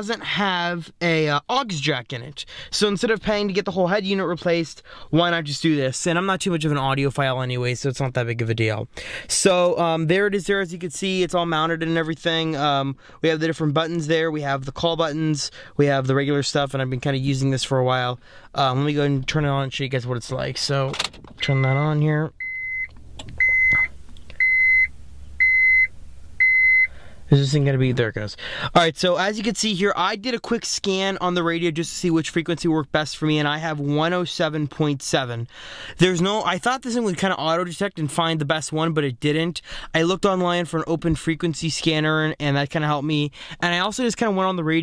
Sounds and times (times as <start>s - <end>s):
Speech: 0.0s - 22.3s, 27.3s - 44.8s.